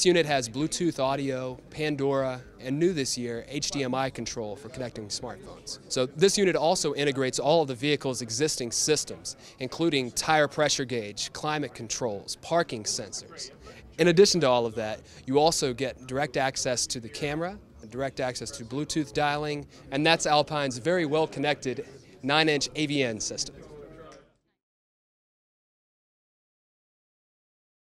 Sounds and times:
Speech: 0.0s - 24.3s.

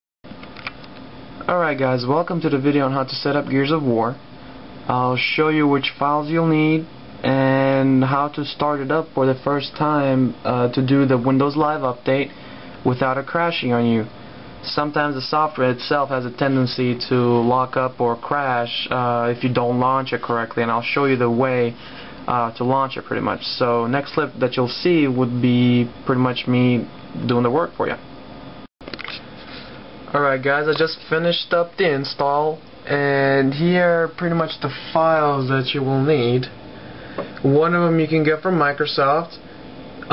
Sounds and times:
Speech: 1.4s - 4.2s, 4.9s - 28.1s, 30.1s - 36.6s, 37.4s - 40.1s.

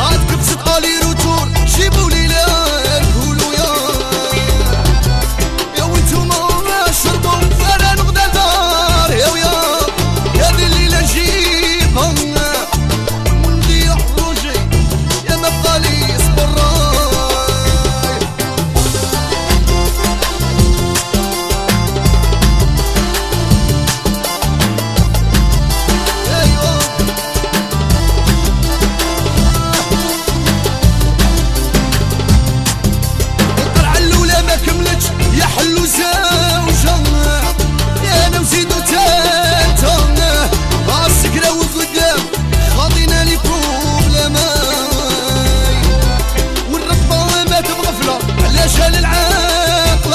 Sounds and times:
Music of Africa: 0.0s - 50.1s.

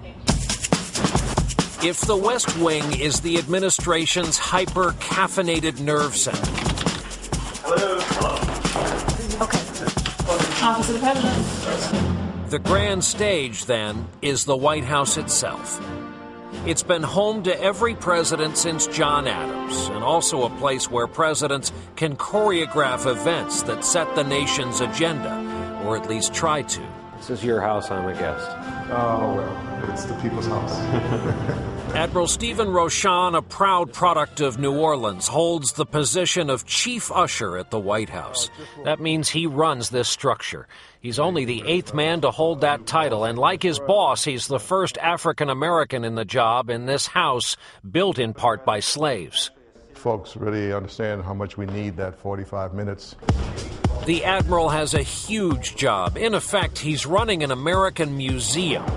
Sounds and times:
Music: 0.0s - 40.0s, 41.1s - 44.8s, 49.4s - 58.9s
Speech: 1.8s - 6.5s, 10.3s - 15.8s, 16.7s - 31.0s, 31.9s - 53.2s, 54.0s - 58.9s.

